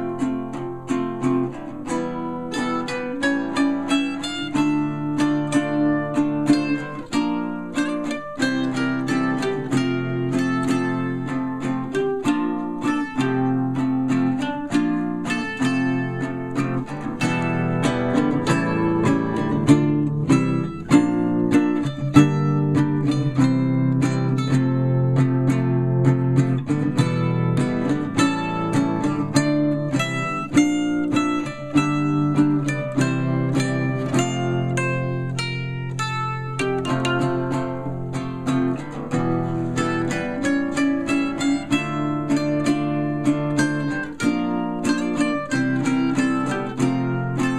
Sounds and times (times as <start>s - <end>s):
Acoustic guitar: 0.0s - 47.5s
Strum: 0.0s - 47.5s.